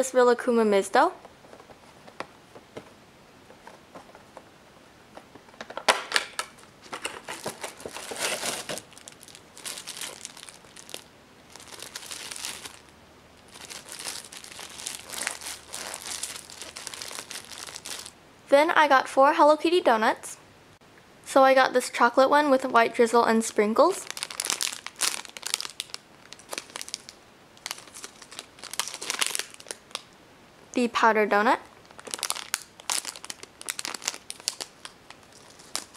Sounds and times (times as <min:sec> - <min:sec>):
Inside, small room: 0:00.0 - 0:35.9
Crumpling, crinkling: 0:06.4 - 0:18.2, 0:23.8 - 0:30.2, 0:31.6 - 0:35.9.